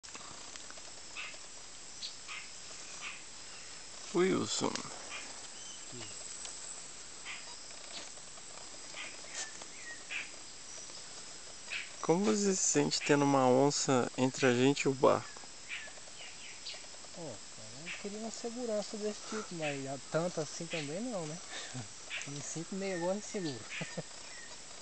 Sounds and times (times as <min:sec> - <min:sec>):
Outside, rural or natural: 0:00.0 - 0:24.8
Bird: 0:01.1 - 0:03.8, 0:04.4 - 0:06.4, 0:07.2 - 0:13.5, 0:14.2 - 0:24.8.